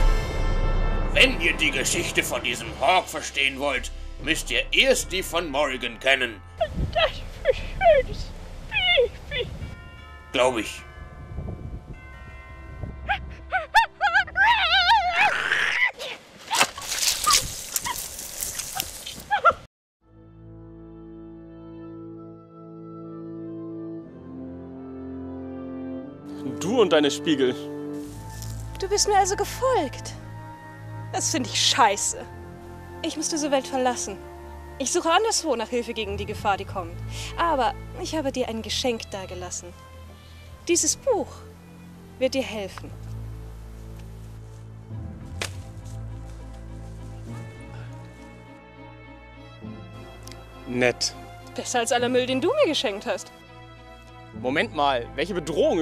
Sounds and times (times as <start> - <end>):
French horn: 0.0 - 8.7, 20.1 - 38.6.